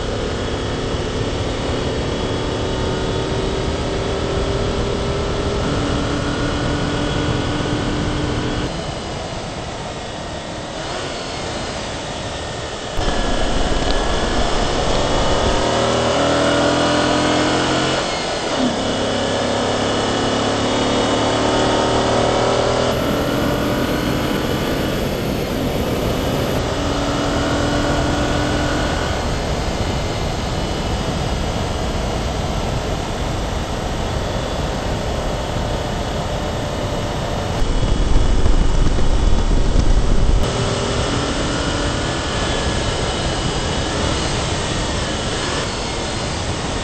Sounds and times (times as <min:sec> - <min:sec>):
Car: 0:00.0 - 0:46.8.